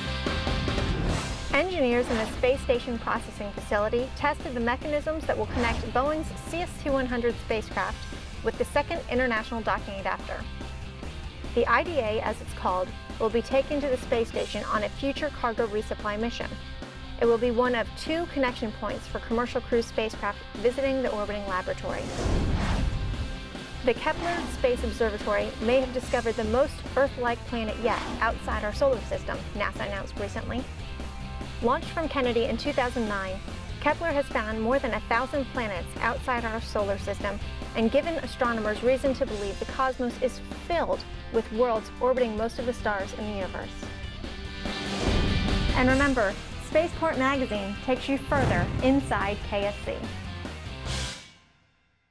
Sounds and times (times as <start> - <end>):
Music: 0.0 - 52.1
Speech: 1.5 - 10.4, 11.6 - 16.6, 17.2 - 22.0, 23.8 - 30.7, 31.6 - 43.8, 45.8 - 50.1.